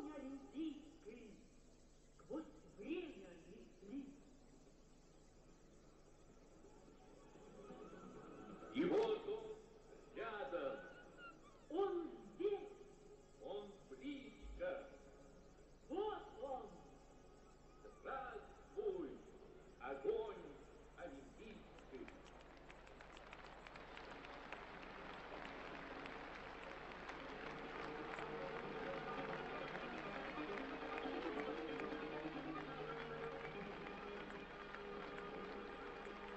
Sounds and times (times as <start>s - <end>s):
Speech: 0.0s - 1.5s, 2.2s - 4.2s, 8.7s - 11.0s, 11.7s - 12.8s, 13.4s - 15.0s, 15.9s - 16.9s, 17.9s - 22.2s.